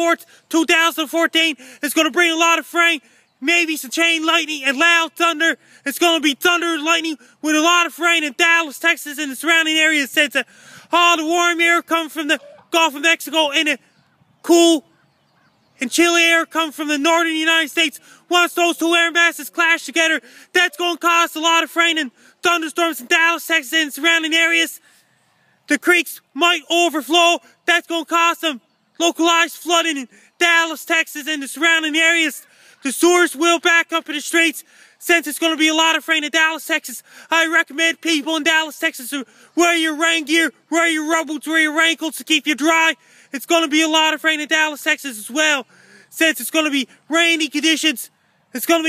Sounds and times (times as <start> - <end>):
Speech: 0.0 - 13.8, 14.5 - 14.8, 15.8 - 24.8, 25.7 - 48.8.